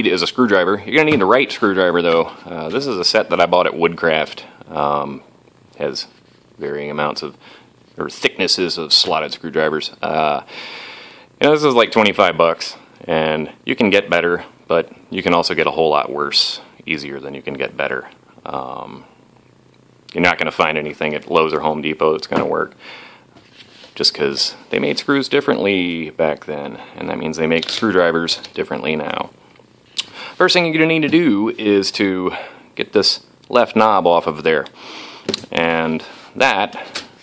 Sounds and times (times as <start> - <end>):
Speech: 0.0 - 7.4, 8.0 - 10.5, 11.4 - 19.1, 20.1 - 22.8, 24.0 - 29.3, 30.4 - 34.7, 35.5 - 36.9.